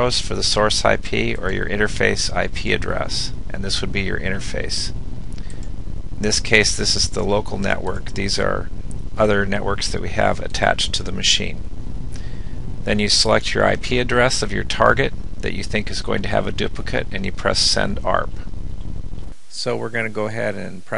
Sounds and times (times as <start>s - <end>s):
Speech: 0.0s - 5.0s, 6.2s - 11.6s, 12.8s - 18.5s, 19.5s - 20.9s.